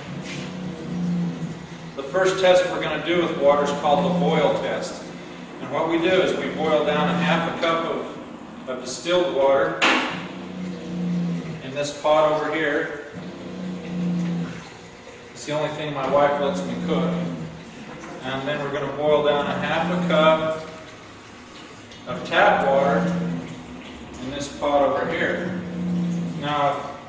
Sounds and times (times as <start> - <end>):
Speech: 2.0 - 9.8, 11.6 - 13.0, 15.4 - 17.4, 18.2 - 20.7, 22.1 - 23.2, 24.2 - 25.6, 26.4 - 27.0.